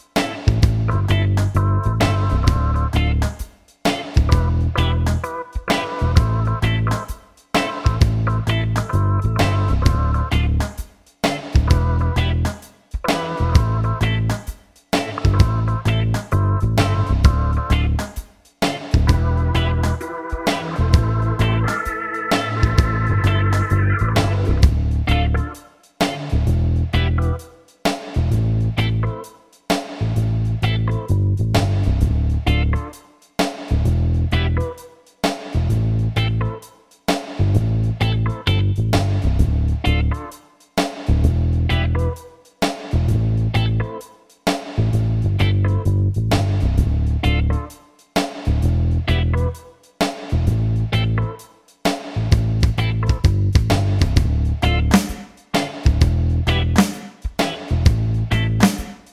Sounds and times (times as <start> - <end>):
Music: 0.0 - 59.1.